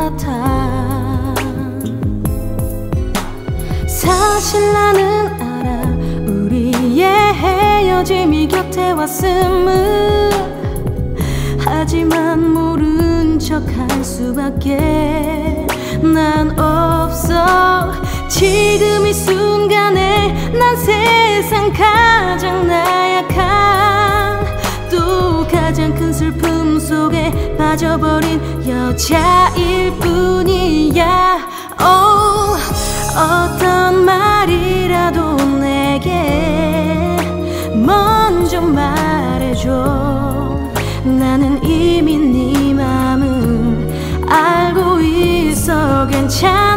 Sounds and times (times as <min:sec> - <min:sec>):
Music: 0:00.0 - 0:46.7.